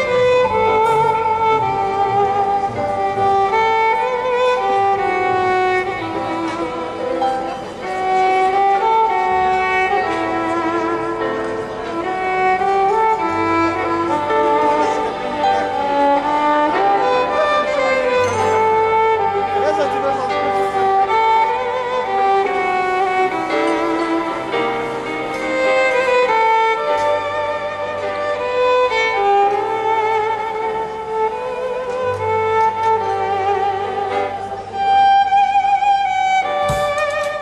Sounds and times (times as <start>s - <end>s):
Violin, fiddle: 0.0s - 37.4s
Speech: 19.5s - 20.4s.